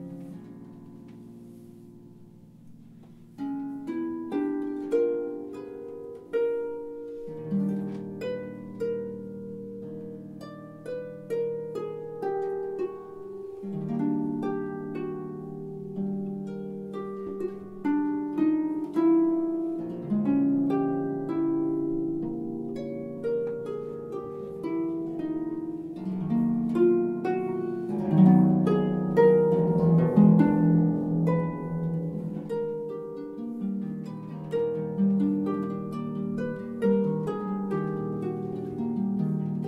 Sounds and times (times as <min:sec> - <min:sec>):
Harp: 0:00.0 - 0:39.6.